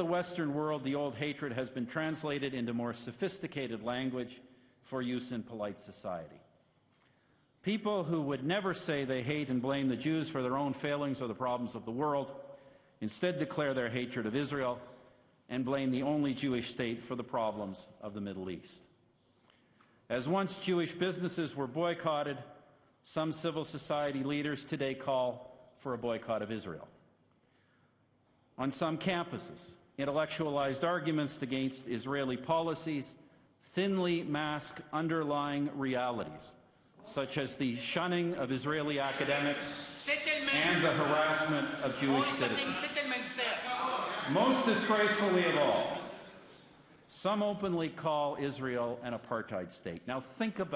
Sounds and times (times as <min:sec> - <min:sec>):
Male speech, man speaking: 0:00.0 - 0:06.4, 0:07.6 - 0:12.4, 0:13.0 - 0:14.9, 0:15.5 - 0:18.9, 0:20.1 - 0:27.0, 0:28.6 - 0:46.2, 0:47.1 - 0:50.7.